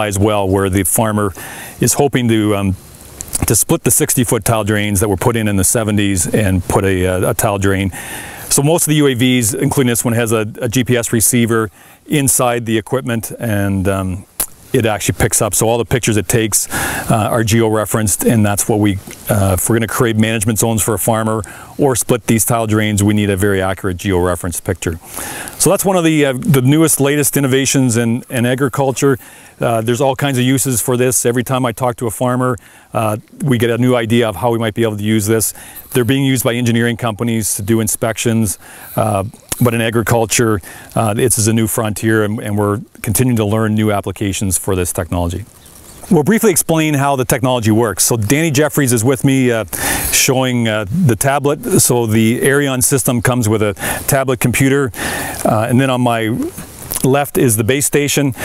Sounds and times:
Speech: 0:00.0 - 0:02.8, 0:03.4 - 0:25.0, 0:25.6 - 0:45.5, 0:46.1 - 0:58.4
Outside, rural or natural: 0:00.0 - 0:58.4.

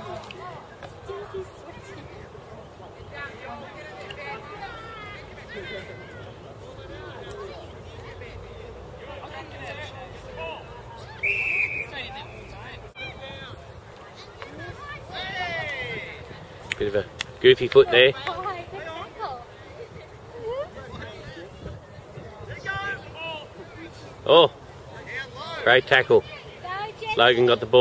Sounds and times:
Outside, rural or natural: 0:00.0 - 0:27.8.

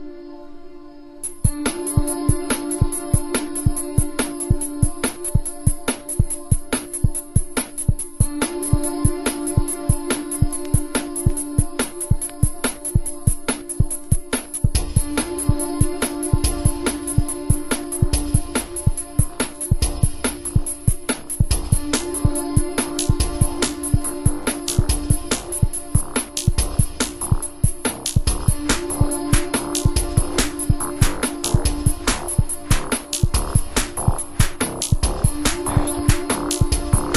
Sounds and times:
Music: 0:00.0 - 0:37.1.

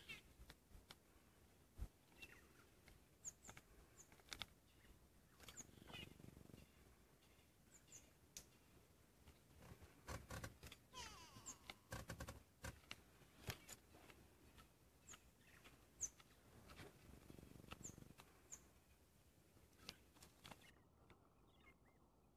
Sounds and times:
Chirp, tweet: 0:00.0 - 0:00.3, 0:02.1 - 0:08.6, 0:17.8 - 0:18.7, 0:19.8 - 0:22.3.

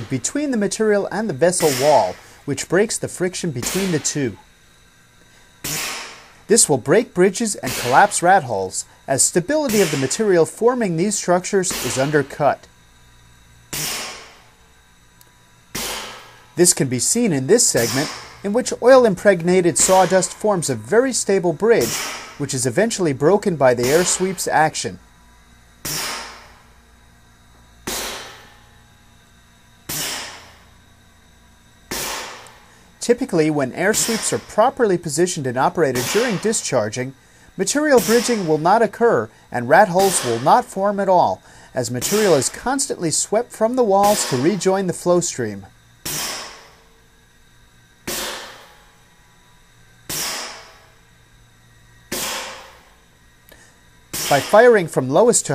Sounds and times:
Speech: 0:00.0 - 0:04.4, 0:06.5 - 0:12.7, 0:16.6 - 0:25.0, 0:33.0 - 0:45.8, 0:54.3 - 0:55.5.

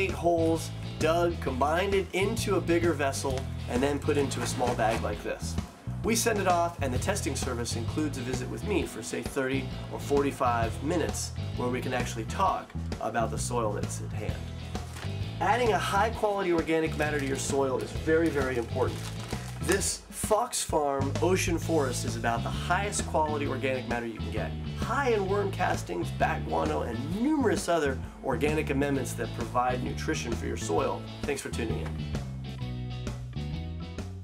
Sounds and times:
Speech: 0:00.0 - 0:14.4, 0:15.4 - 0:19.0, 0:19.6 - 0:32.0.

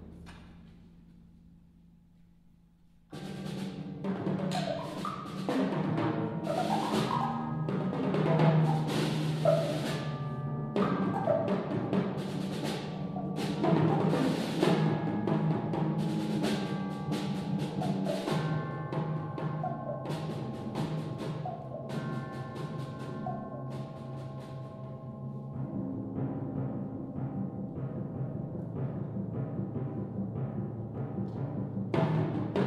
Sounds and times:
Timpani: 0:02.8 - 0:32.6.

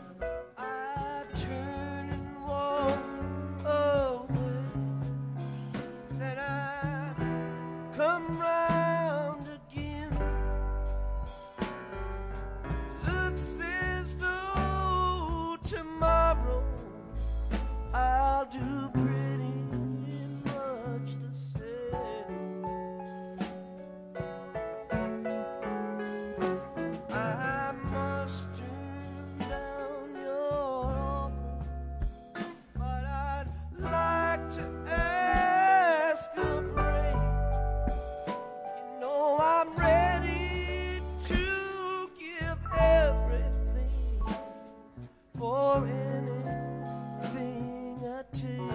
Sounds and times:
Music: 0:00.0 - 0:48.7.

